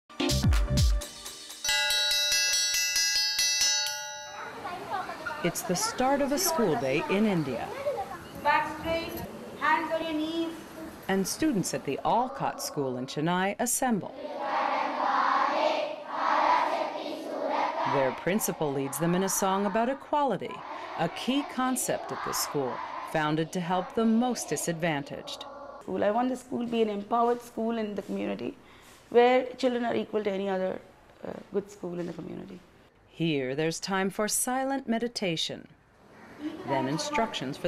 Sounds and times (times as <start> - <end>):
Music: 0.1 - 3.2
Child speech, kid speaking: 4.4 - 11.0, 12.1 - 13.2, 17.9 - 26.1, 36.4 - 37.6.